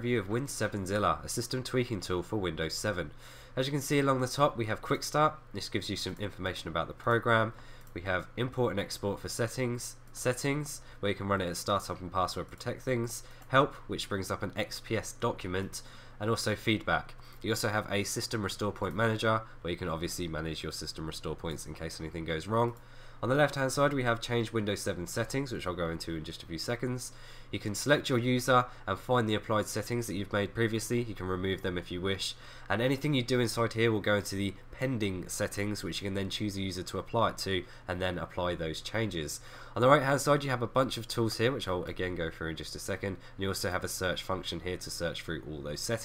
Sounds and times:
Speech: 0.0 - 46.0.

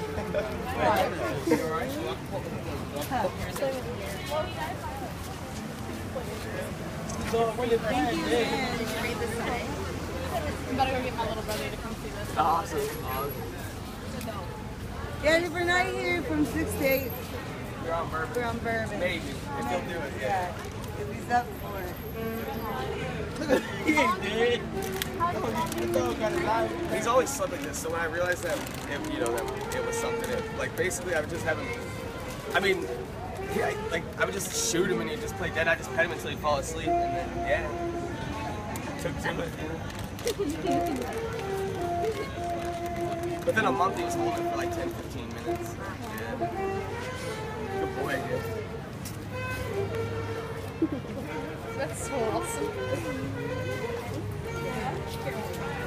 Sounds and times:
Music: 29.3 - 39.0, 39.9 - 55.8.

